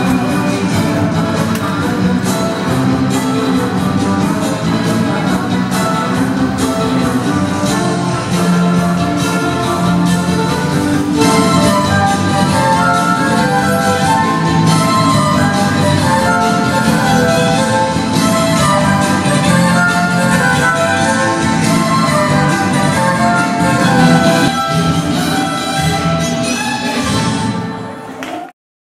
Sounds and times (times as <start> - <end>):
Violin, fiddle: 0.0 - 28.0.